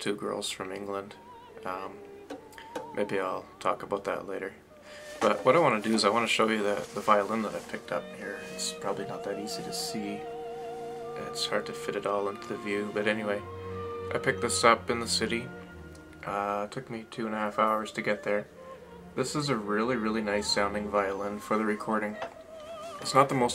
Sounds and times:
Speech: 0:00.0 - 0:02.0, 0:03.0 - 0:04.6, 0:05.2 - 0:10.2, 0:11.2 - 0:13.4, 0:14.1 - 0:15.5, 0:16.2 - 0:18.5, 0:19.2 - 0:22.2, 0:23.0 - 0:23.5
Musical instrument: 0:06.6 - 0:23.5.

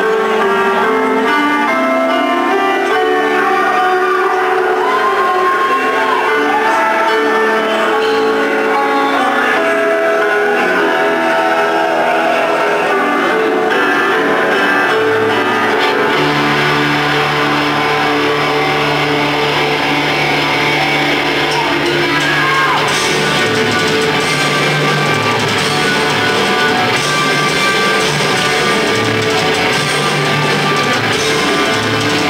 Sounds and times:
Rhythm and blues: 0:00.0 - 0:32.2.

